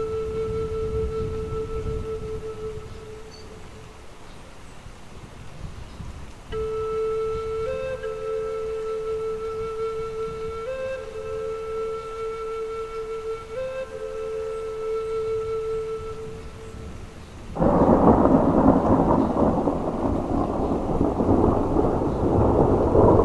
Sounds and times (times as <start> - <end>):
Rain: 0.0 - 23.2.